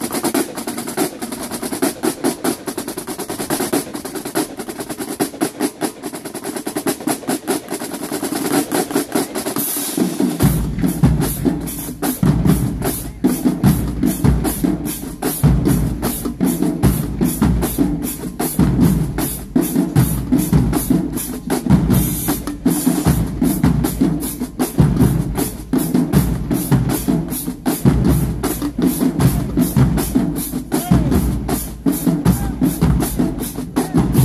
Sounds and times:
Percussion: 0.0 - 34.2.

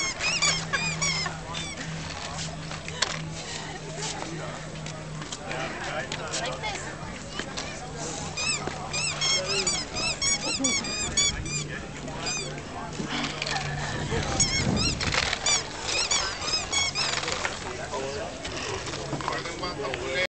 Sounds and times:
Speech: 1.1 - 15.0, 16.4 - 20.2.

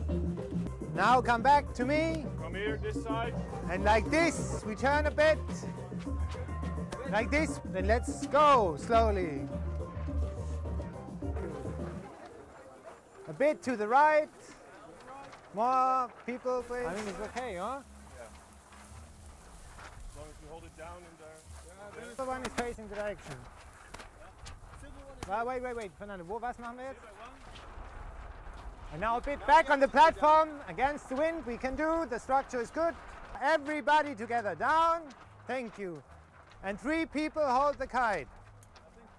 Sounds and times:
Speech: 1.0 - 5.7, 7.0 - 9.5, 13.3 - 18.3, 20.2 - 23.5, 24.2 - 27.4, 28.9 - 36.0, 36.6 - 38.3.

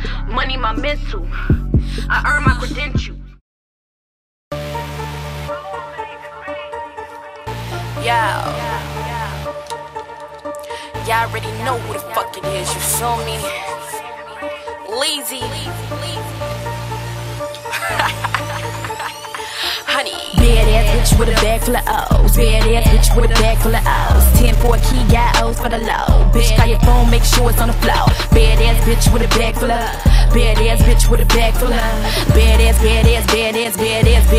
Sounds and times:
Music: 0.0 - 3.4, 4.6 - 34.3.

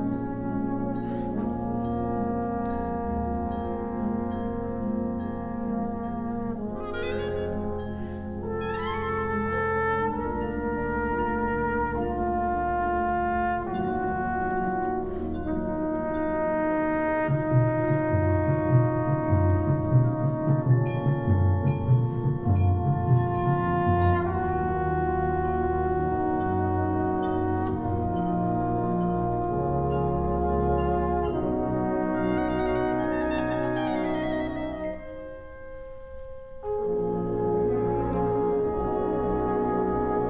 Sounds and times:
Trombone: 0.0 - 40.2.

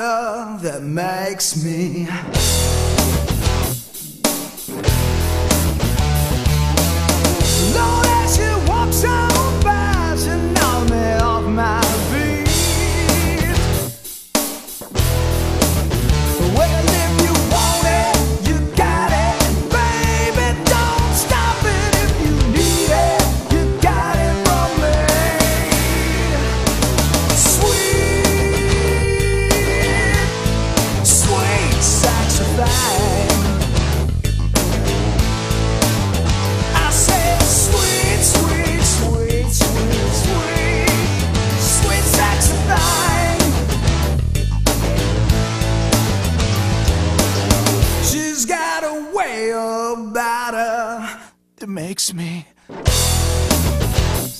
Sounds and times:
Music: 1.9 - 48.4, 52.7 - 54.3.

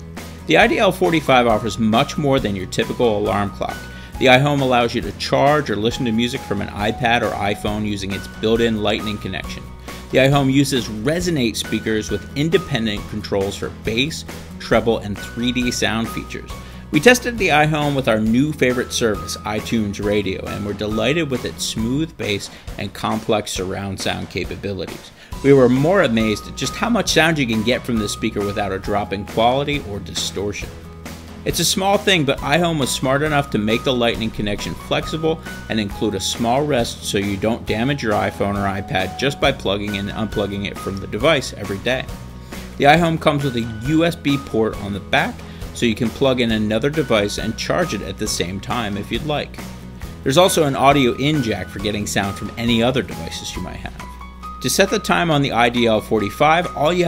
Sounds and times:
Music: 0.0 - 57.0
Speech: 0.5 - 30.7, 31.5 - 42.1, 42.8 - 49.6, 50.2 - 54.0, 54.6 - 57.0.

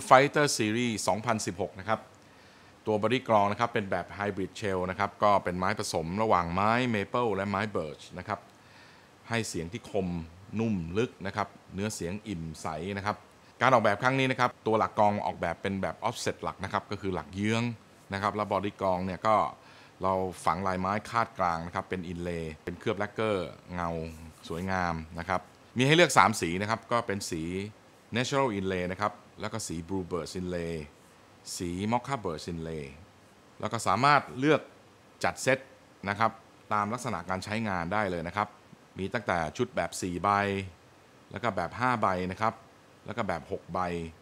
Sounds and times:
Speech: 0.0 - 2.1, 2.9 - 8.5, 9.3 - 44.2.

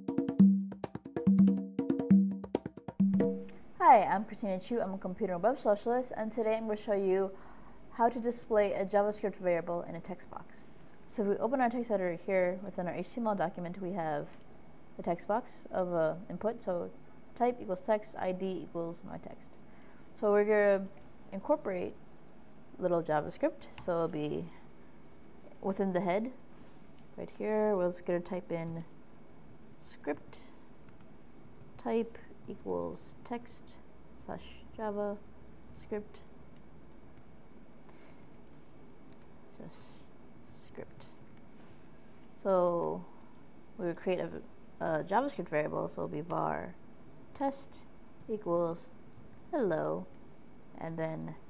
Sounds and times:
Inside, small room: 0.0 - 51.4
Speech: 3.8 - 7.4, 8.0 - 14.4, 15.0 - 19.6, 20.2 - 22.0, 22.8 - 24.6, 25.6 - 26.4, 27.2 - 28.9, 29.8 - 30.6, 31.8 - 35.2, 35.8 - 36.2, 39.6 - 41.2, 42.4 - 43.1, 43.8 - 46.8, 47.4 - 48.9, 49.5 - 50.1, 50.8 - 51.4.

